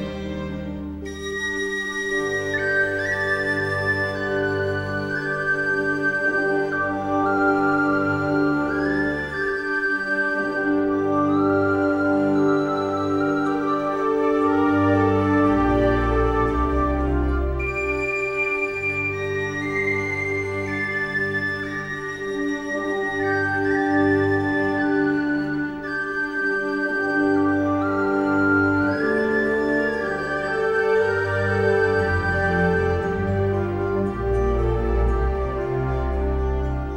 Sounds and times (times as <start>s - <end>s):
Music: 0.0s - 36.9s.